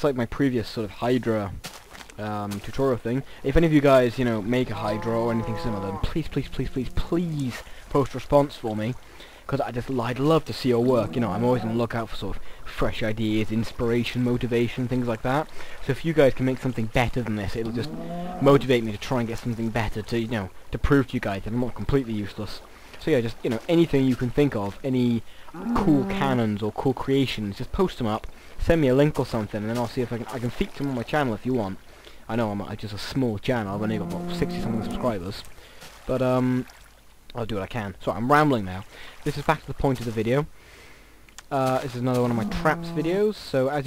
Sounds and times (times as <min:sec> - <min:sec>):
Speech: 0:00.0 - 0:01.6, 0:02.2 - 0:35.5, 0:36.1 - 0:36.7, 0:37.3 - 0:40.5, 0:41.4 - 0:43.8.